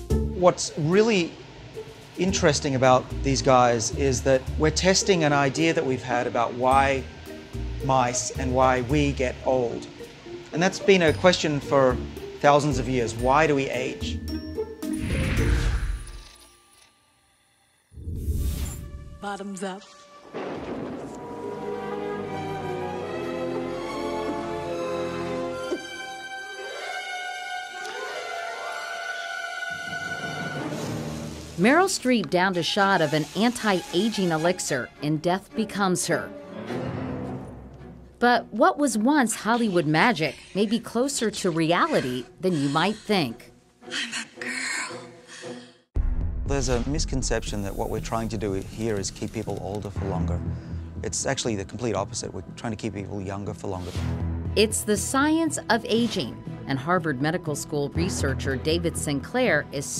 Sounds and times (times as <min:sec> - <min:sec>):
Music: 0:00.0 - 0:59.9.